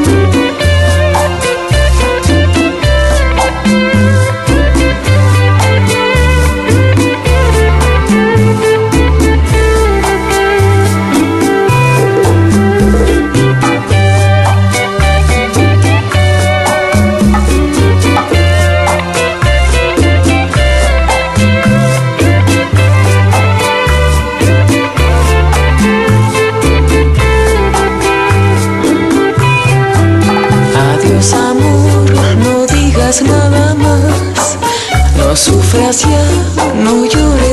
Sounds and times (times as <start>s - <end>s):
Music: 0.0s - 37.5s.